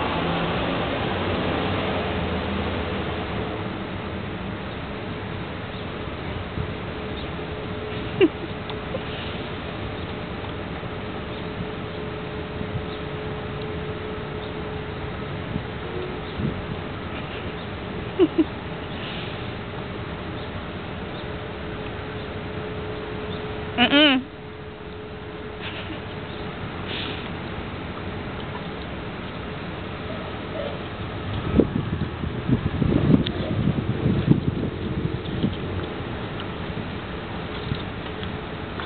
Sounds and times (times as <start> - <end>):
Outside, urban or manmade: 0.0 - 38.8.